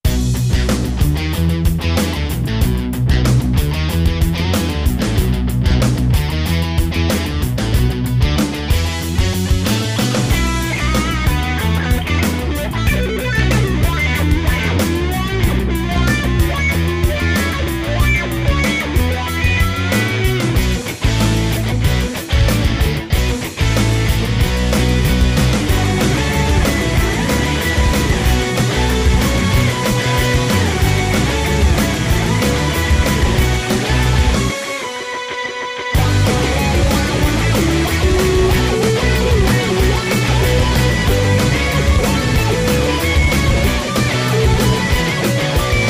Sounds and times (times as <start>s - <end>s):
Music: 0.0s - 45.9s.